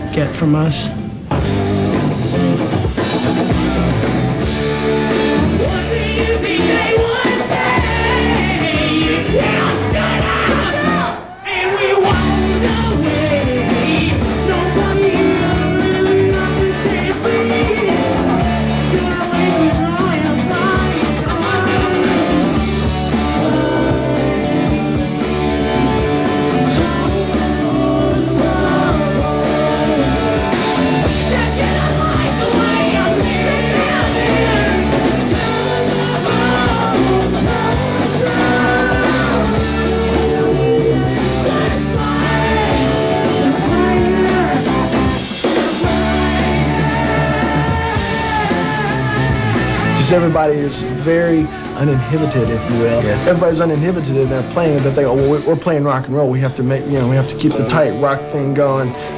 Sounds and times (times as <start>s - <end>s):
Rock and roll: 0.0s - 59.1s.